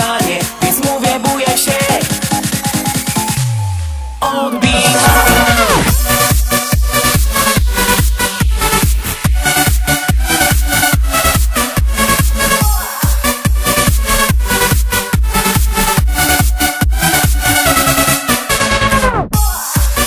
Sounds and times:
Disco: 0:00.0 - 0:20.0
Pop music: 0:00.0 - 0:20.0.

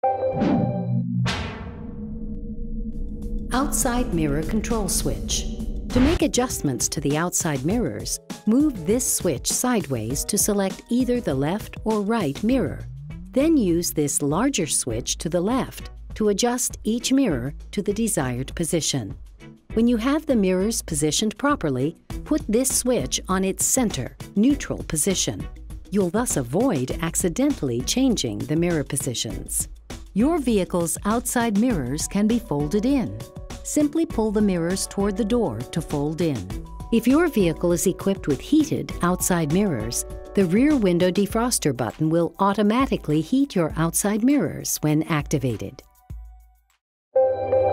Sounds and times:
Music: 0:00.0 - 0:47.7
Speech: 0:03.5 - 0:12.8, 0:13.4 - 0:19.1, 0:19.8 - 0:45.8.

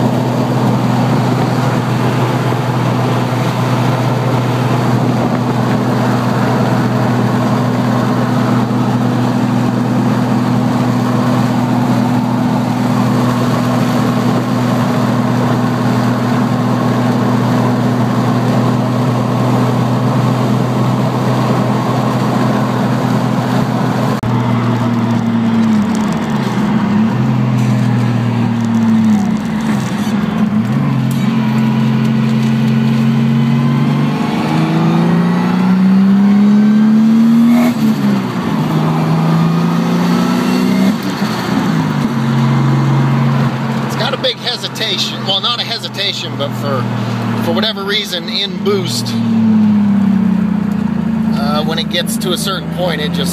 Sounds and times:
Car: 0:00.0 - 0:53.3.

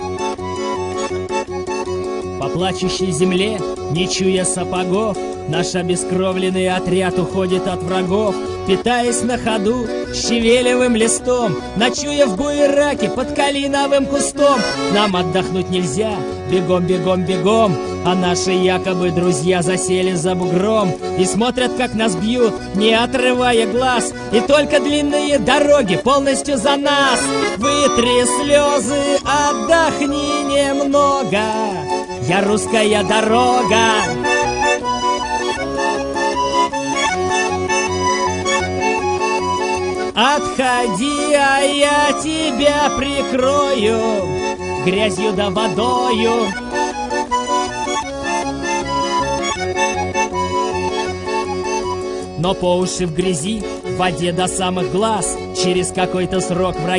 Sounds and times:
Music: 0:00.0 - 0:56.9.

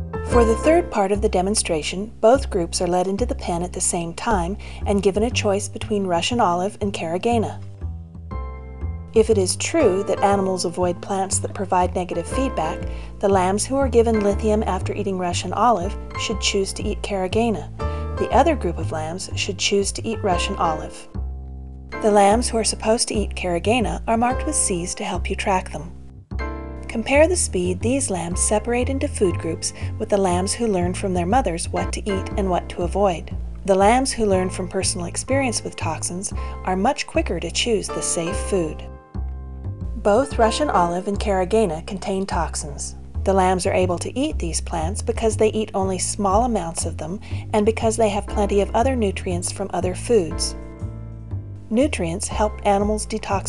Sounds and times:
Music: 0:00.0 - 0:53.4
Speech: 0:00.3 - 0:07.6, 0:09.2 - 0:21.1, 0:22.0 - 0:25.9, 0:26.9 - 0:38.9, 0:40.0 - 0:50.6, 0:51.7 - 0:53.4.

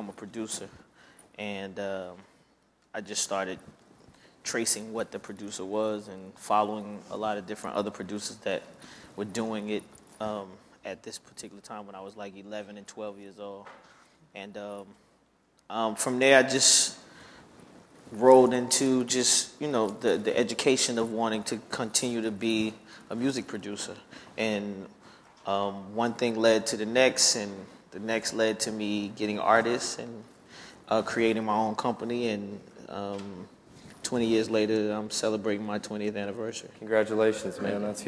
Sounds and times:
Speech: 0:00.0 - 0:00.8, 0:01.4 - 0:02.3, 0:03.0 - 0:03.7, 0:04.5 - 0:13.7, 0:14.4 - 0:15.0, 0:15.7 - 0:17.0, 0:18.1 - 0:30.2, 0:30.9 - 0:38.0.

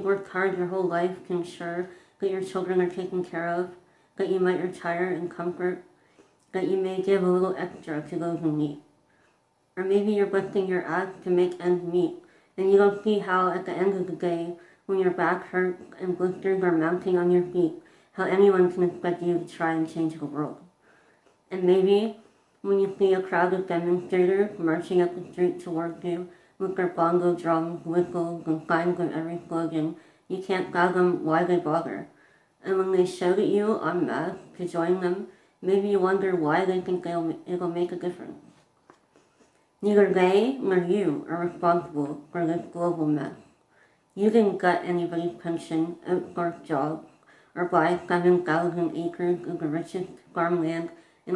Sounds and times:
Speech: 0:00.0 - 0:05.9, 0:06.5 - 0:08.9, 0:09.8 - 0:20.7, 0:21.5 - 0:38.5, 0:39.8 - 0:43.4, 0:44.2 - 0:51.3
Inside, small room: 0:00.0 - 0:51.3.

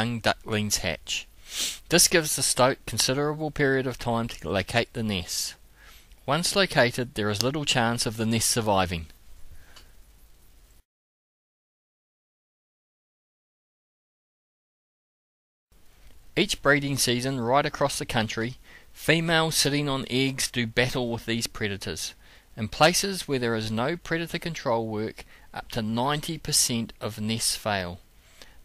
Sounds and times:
Speech: 0:00.0 - 0:01.3, 0:01.9 - 0:05.6, 0:06.2 - 0:09.2, 0:16.4 - 0:28.0.

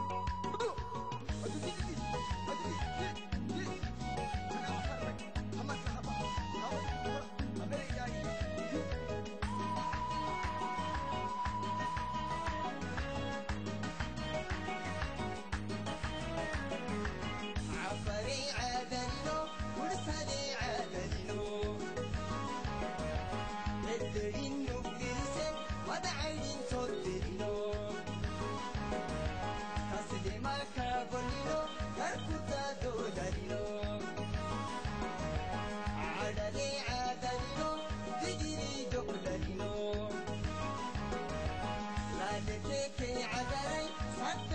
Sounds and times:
Music: 0:00.0 - 0:44.5.

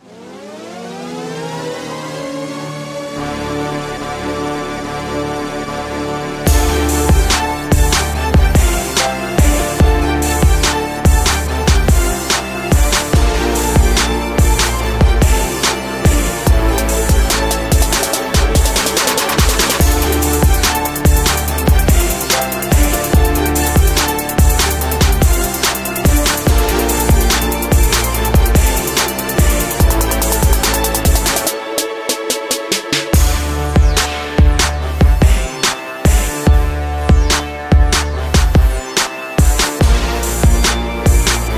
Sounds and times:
Music: 0:00.0 - 0:41.5.

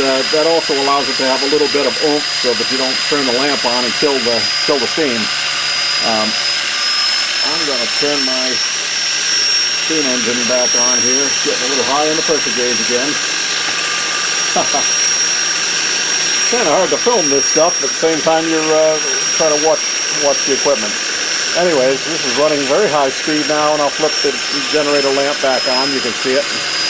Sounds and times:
Speech: 0:00.0 - 0:05.3, 0:06.0 - 0:06.4, 0:07.4 - 0:08.6, 0:09.9 - 0:13.2, 0:16.5 - 0:26.6
Engine: 0:00.0 - 0:26.8.

